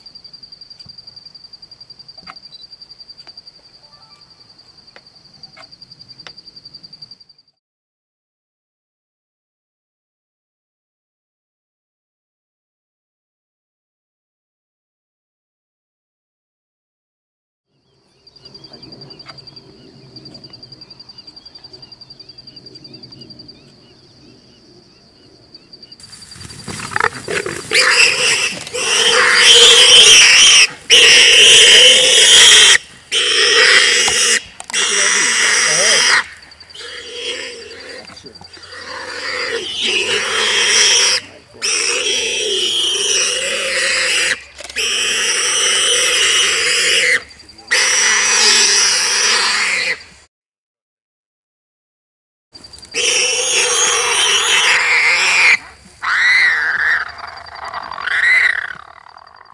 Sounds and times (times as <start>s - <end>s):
Pig: 26.7s - 50.0s, 52.9s - 59.5s.